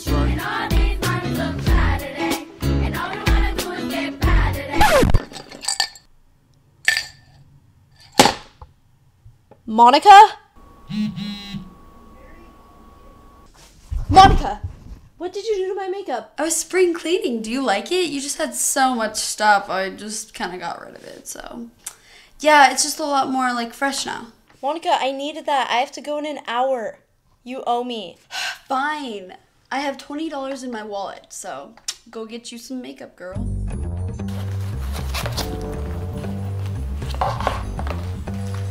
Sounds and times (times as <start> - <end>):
Speech: 9.7 - 10.4, 14.1 - 21.7, 22.4 - 33.4.